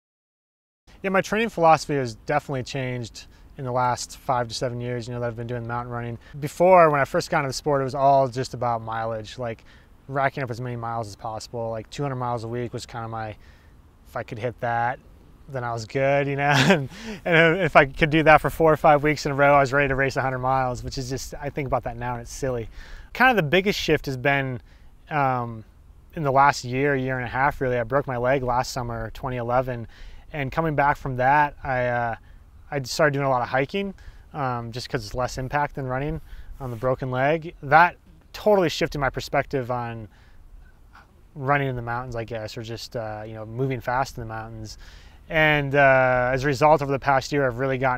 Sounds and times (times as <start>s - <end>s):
Speech: 1.0s - 13.4s, 14.1s - 40.1s, 41.4s - 47.9s.